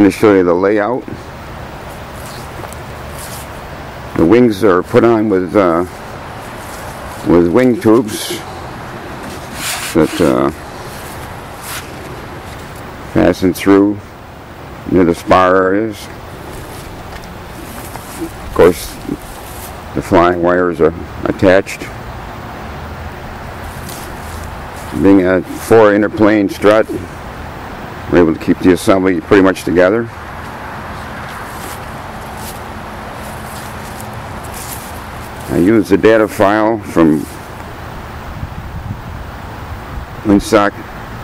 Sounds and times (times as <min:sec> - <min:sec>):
Speech: 0:00.0 - 0:01.2, 0:04.2 - 0:05.9, 0:07.2 - 0:08.5, 0:09.9 - 0:10.6, 0:13.2 - 0:14.0, 0:14.9 - 0:16.2, 0:18.5 - 0:19.2, 0:20.0 - 0:22.0, 0:24.9 - 0:27.1, 0:28.1 - 0:30.1, 0:35.5 - 0:37.3, 0:40.2 - 0:40.8.